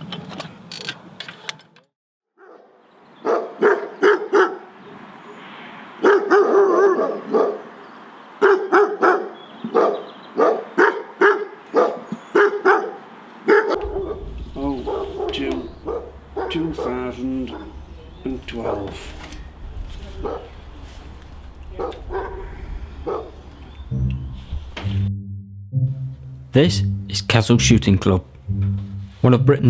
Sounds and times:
Bird: 7.3s - 10.9s.

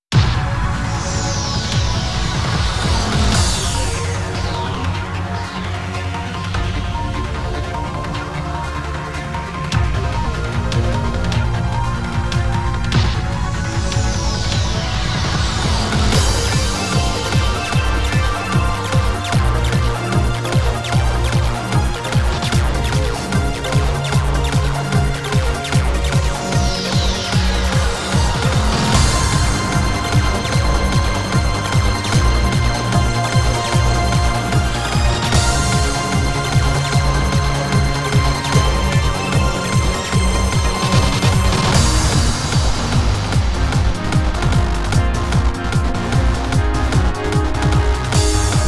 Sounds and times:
Music: 0.0s - 48.6s.

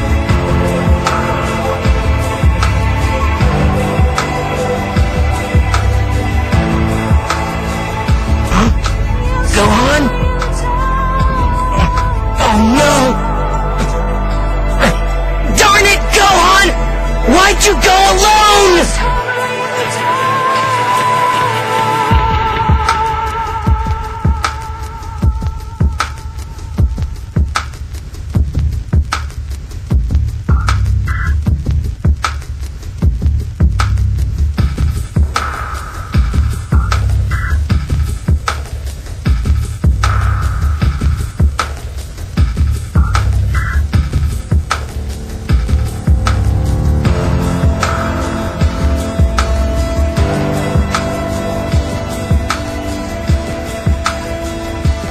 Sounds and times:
Music: 0.0s - 55.1s.

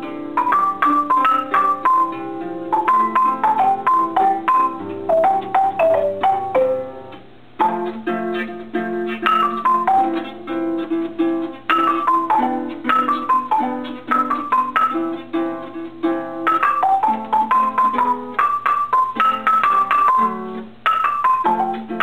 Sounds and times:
Music: 0.0s - 22.0s.

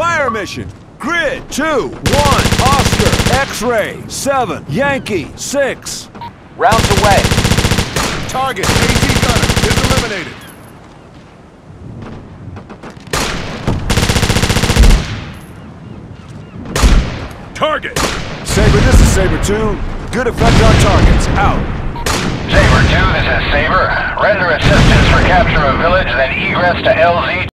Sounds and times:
Speech: 0.0s - 7.2s, 8.3s - 10.3s, 17.6s - 21.6s, 22.5s - 27.5s.

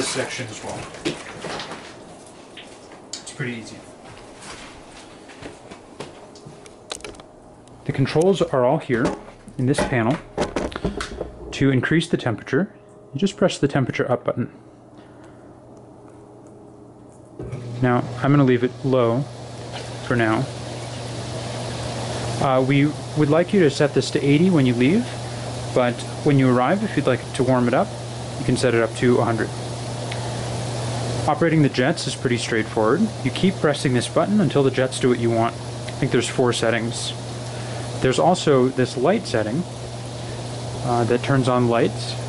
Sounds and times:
Speech: 0.0s - 0.9s, 3.2s - 3.9s, 7.8s - 10.2s, 11.6s - 14.6s, 17.8s - 19.3s, 20.0s - 20.5s, 22.4s - 25.2s, 25.8s - 29.6s, 31.3s - 37.2s, 38.0s - 39.7s, 40.8s - 42.2s.

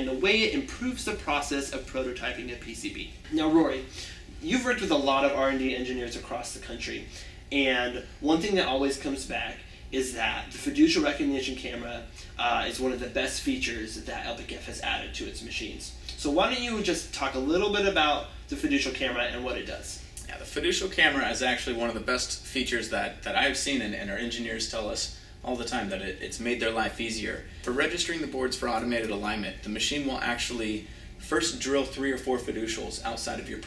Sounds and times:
Speech: 0.0s - 33.6s.

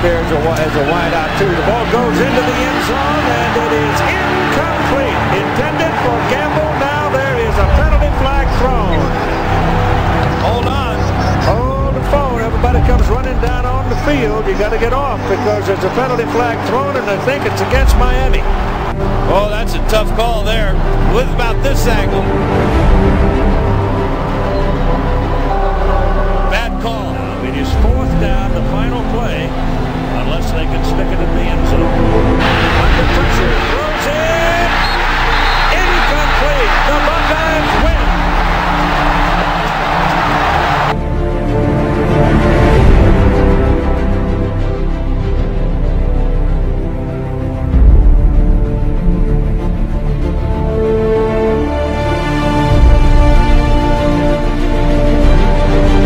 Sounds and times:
Speech: 0.0s - 9.2s, 10.4s - 18.5s, 19.3s - 22.3s, 26.5s - 32.0s, 32.8s - 34.8s, 35.7s - 38.1s
Music: 0.0s - 56.0s.

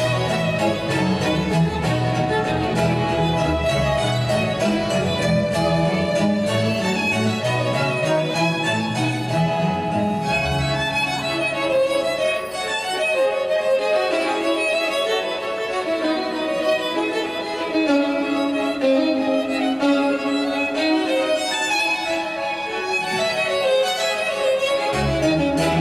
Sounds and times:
Violin, fiddle: 0.0s - 25.8s.

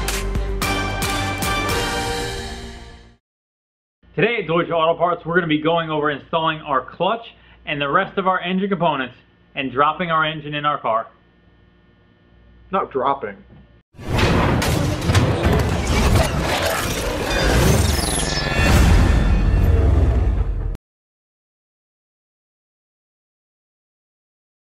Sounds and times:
Music: 0.0s - 3.2s, 14.2s - 16.4s
Speech: 4.1s - 11.2s, 12.7s - 13.5s.

